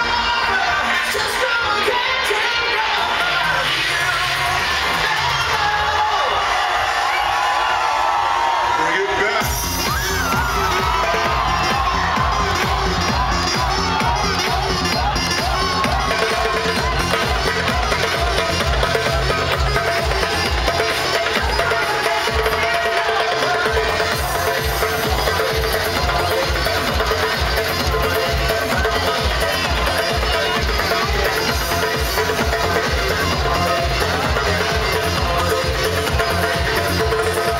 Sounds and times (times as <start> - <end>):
Techno: 8.2 - 37.5.